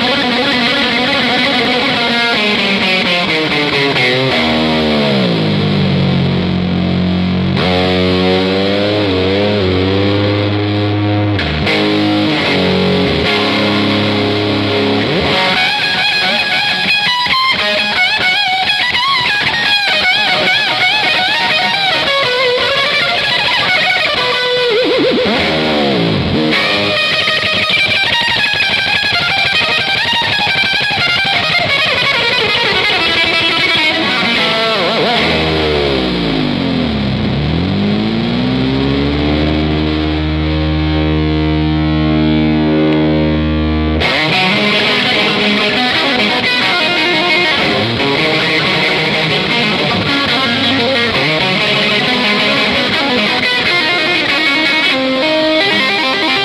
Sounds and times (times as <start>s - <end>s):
Electric guitar: 0.0s - 56.4s.